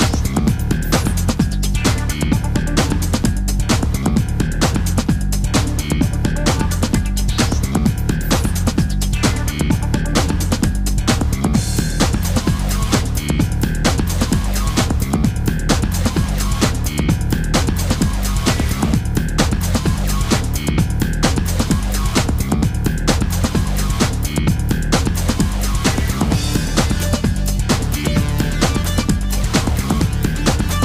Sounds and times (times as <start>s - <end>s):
Techno: 0.0s - 30.8s.